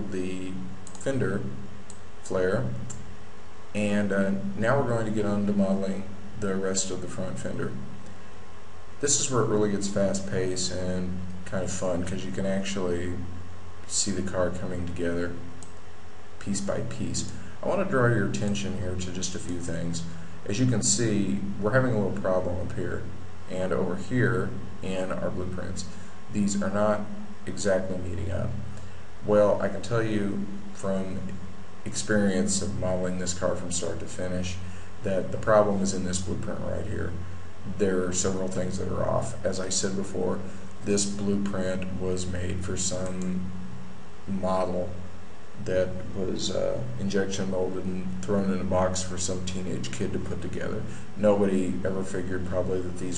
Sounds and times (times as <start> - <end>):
Speech: 0.0 - 1.6, 2.2 - 3.0, 3.7 - 7.9, 9.0 - 15.6, 16.4 - 43.6, 44.3 - 53.1.